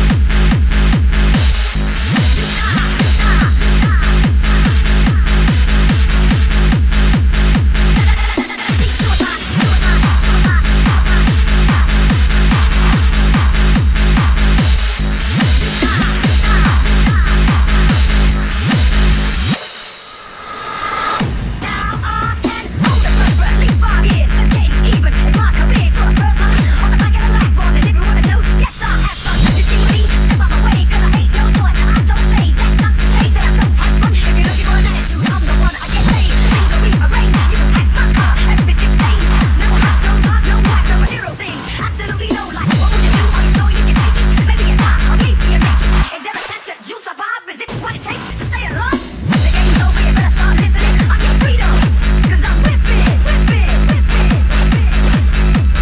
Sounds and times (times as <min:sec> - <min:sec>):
Music: 0:00.0 - 0:55.8.